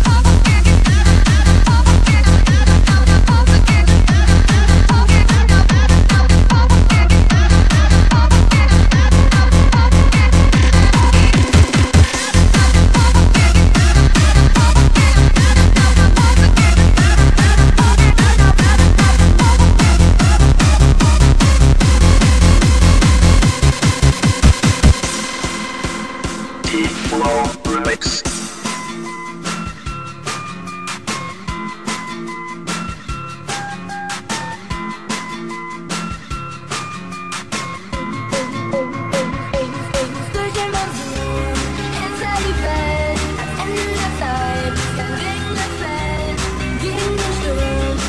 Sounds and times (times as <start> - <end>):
Techno: 0.0 - 29.6, 38.0 - 48.0.